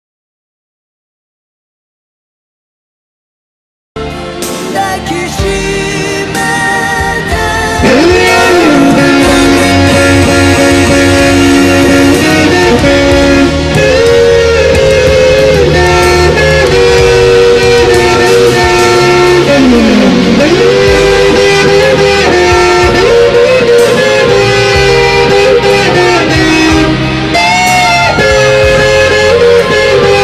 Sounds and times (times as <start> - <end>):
Bass guitar: 4.0 - 30.2
Electric guitar: 4.0 - 30.2
Strum: 4.0 - 30.2.